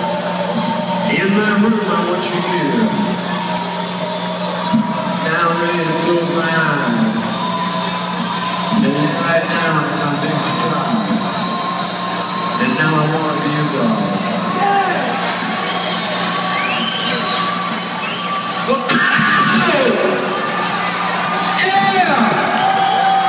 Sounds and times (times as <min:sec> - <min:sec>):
Music: 0:00.0 - 0:23.2
Speech: 0:01.1 - 0:03.2, 0:05.2 - 0:07.2, 0:08.7 - 0:11.1, 0:12.6 - 0:15.1, 0:18.7 - 0:20.2, 0:21.6 - 0:22.4.